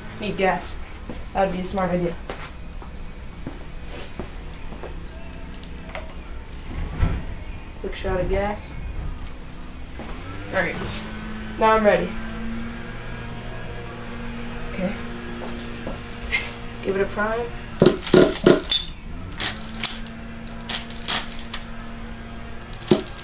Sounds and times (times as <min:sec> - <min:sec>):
Speech: 0:00.2 - 0:00.8, 0:01.4 - 0:02.2, 0:07.8 - 0:08.8, 0:10.5 - 0:10.9, 0:11.6 - 0:12.2, 0:16.8 - 0:17.5
Car: 0:04.5 - 0:23.2.